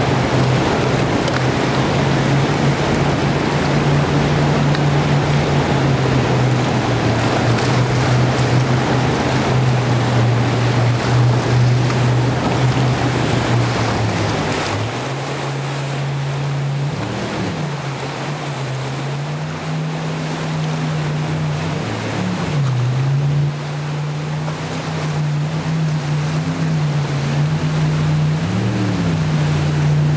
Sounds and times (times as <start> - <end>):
Sailboat, sailing ship: 0.0 - 30.1.